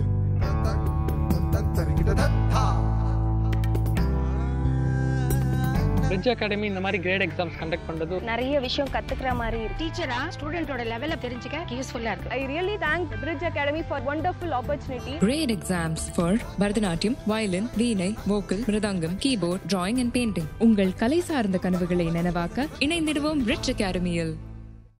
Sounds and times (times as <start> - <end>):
Music: 0.0 - 24.9.